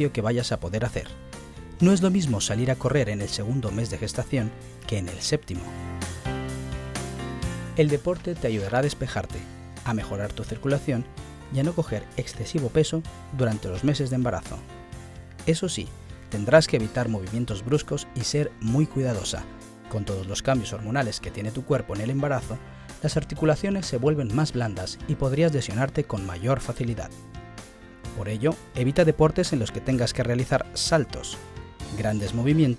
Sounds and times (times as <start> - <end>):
Speech: 0.0 - 1.2, 1.8 - 5.7, 7.8 - 14.7, 15.4 - 27.1, 28.2 - 32.7
Music: 0.0 - 32.7.